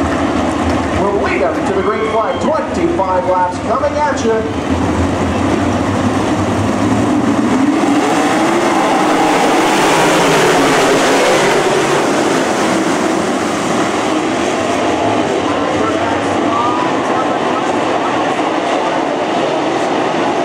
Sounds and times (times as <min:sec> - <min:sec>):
Race car, auto racing: 0:00.0 - 0:20.4.